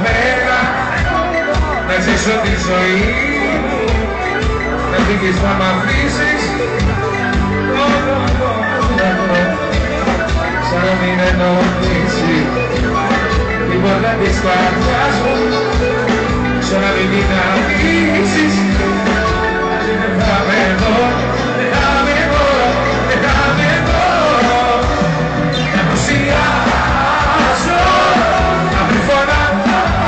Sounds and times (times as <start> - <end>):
Rhythm and blues: 0.0 - 30.0.